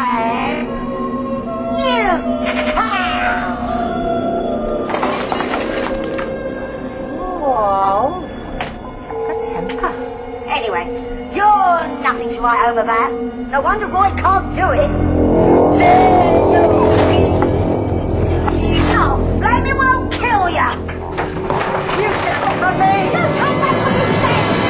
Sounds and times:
Music: 0:00.0 - 0:24.6.

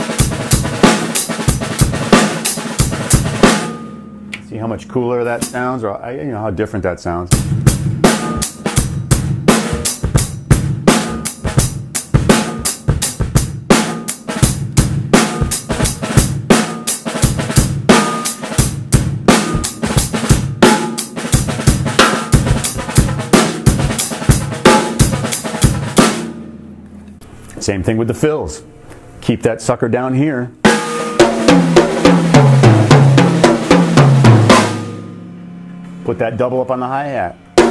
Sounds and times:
Bass drum: 0:00.0 - 0:04.7, 0:07.3 - 0:26.8, 0:30.7 - 0:35.4
Drum roll: 0:00.0 - 0:05.8, 0:07.2 - 0:26.8, 0:30.7 - 0:37.7
Drum kit: 0:00.0 - 0:28.8, 0:29.9 - 0:37.7.

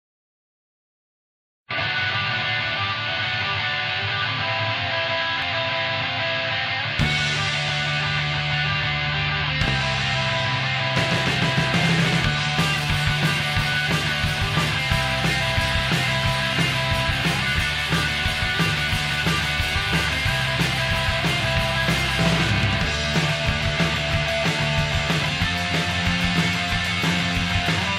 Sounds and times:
Heavy metal: 0:01.7 - 0:27.9.

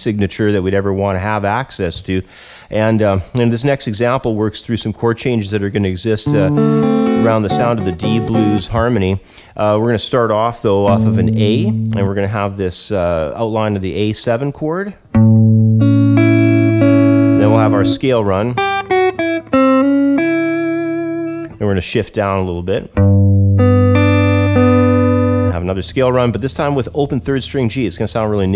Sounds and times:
Speech: 0:00.0 - 0:06.6, 0:07.2 - 0:15.0, 0:17.4 - 0:18.6, 0:21.6 - 0:23.0, 0:25.5 - 0:28.5
Inside, small room: 0:00.0 - 0:28.5
Guitar: 0:06.1 - 0:12.6, 0:15.0 - 0:28.5
Electronic tuner: 0:06.2 - 0:08.9, 0:10.8 - 0:12.3, 0:15.1 - 0:21.6, 0:23.0 - 0:28.5.

